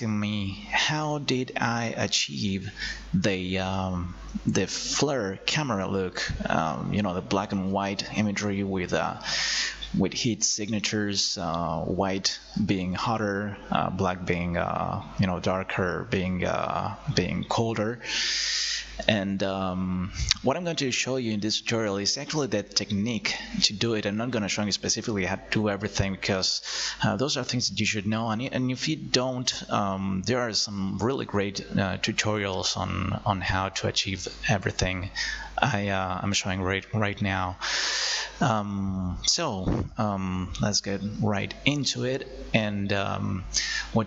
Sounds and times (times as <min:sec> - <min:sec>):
Speech: 0:00.0 - 0:18.1, 0:18.7 - 0:37.7, 0:38.3 - 0:44.0.